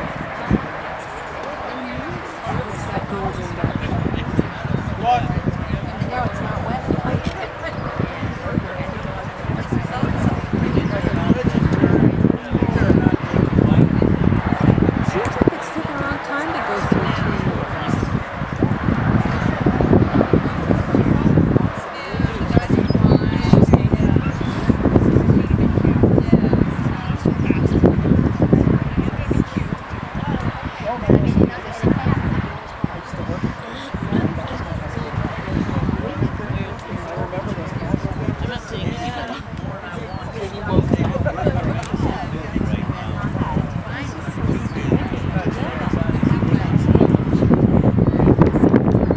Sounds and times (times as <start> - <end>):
Speech: 0.0 - 49.1.